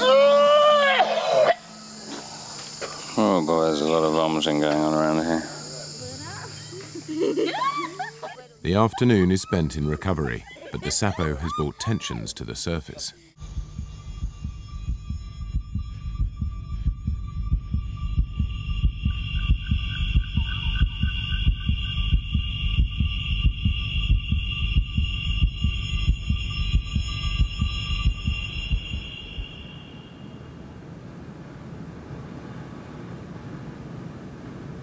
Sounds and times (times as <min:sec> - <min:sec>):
Male speech, man speaking: 0:03.2 - 0:05.9, 0:08.6 - 0:13.2
Music: 0:13.4 - 0:29.9.